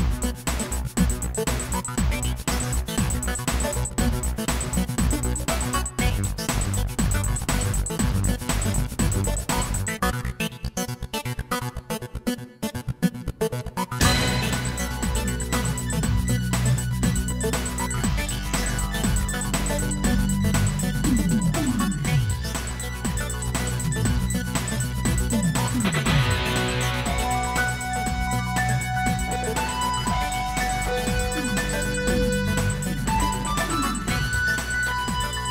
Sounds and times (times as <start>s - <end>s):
Electronic music: 0.0s - 10.6s, 13.1s - 35.5s.